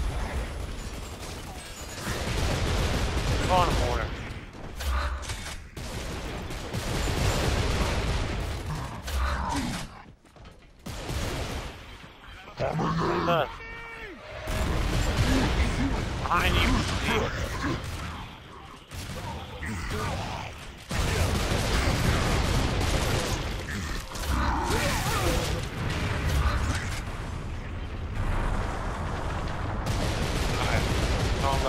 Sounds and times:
Speech: 3.4s - 4.1s, 15.3s - 17.8s.

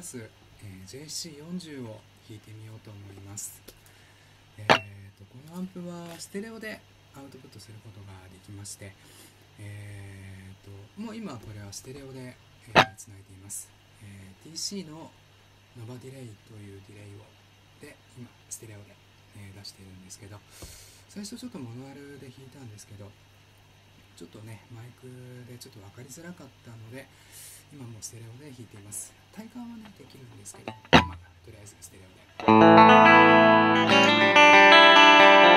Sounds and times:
Speech: 0.0s - 3.7s, 4.6s - 9.0s, 9.6s - 20.5s, 21.1s - 23.2s, 24.2s - 32.4s.

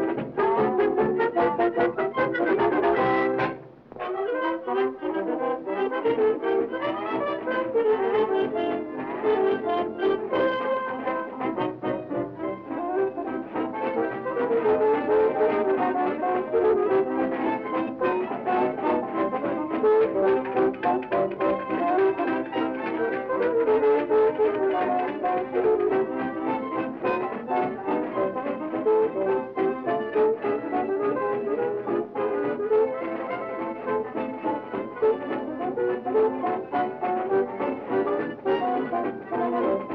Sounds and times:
Music: 0.0s - 39.9s.

